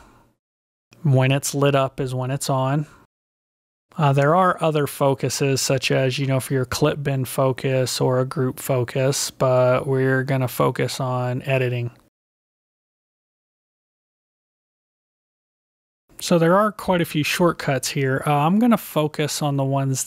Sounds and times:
Speech: 0:01.0 - 0:03.0, 0:03.9 - 0:12.1, 0:16.2 - 0:20.0.

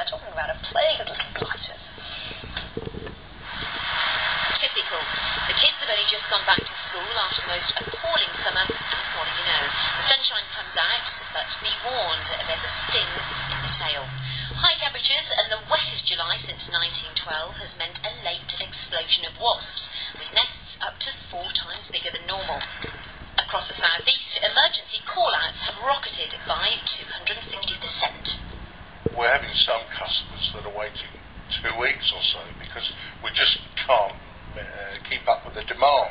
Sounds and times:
Speech: 0:00.0 - 0:01.8, 0:04.6 - 0:13.2, 0:13.8 - 0:22.6, 0:23.4 - 0:28.4, 0:29.1 - 0:36.1.

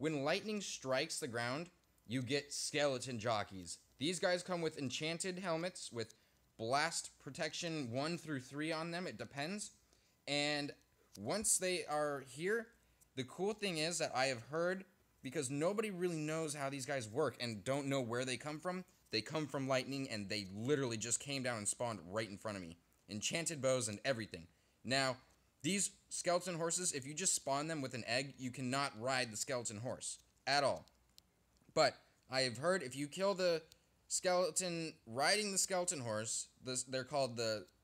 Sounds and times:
Speech: 0:00.0 - 0:31.0, 0:31.7 - 0:37.8.

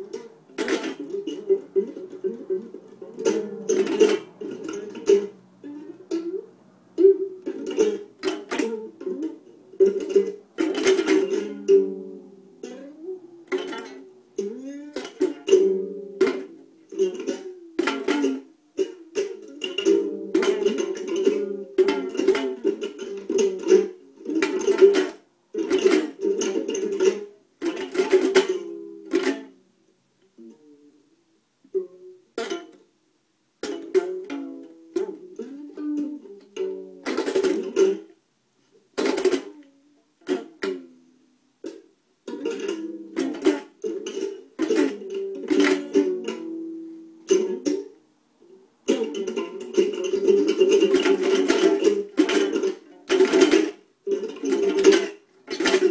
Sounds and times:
Inside, small room: 0:00.0 - 0:55.9
Ukulele: 0:00.0 - 0:55.9.

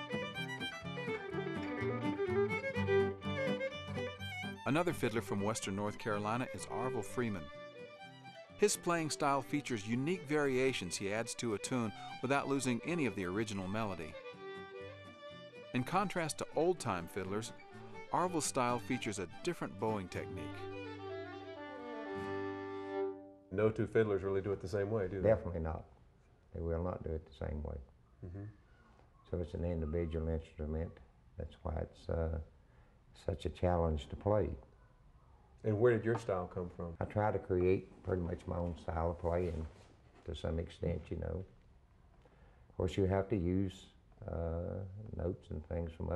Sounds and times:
Violin, fiddle: 0:00.0 - 0:23.4
Speech: 0:04.7 - 0:07.5, 0:08.6 - 0:14.2, 0:15.8 - 0:20.6, 0:23.6 - 0:25.9, 0:26.6 - 0:28.5, 0:29.3 - 0:32.5, 0:33.2 - 0:34.7, 0:35.6 - 0:41.5, 0:42.8 - 0:46.1.

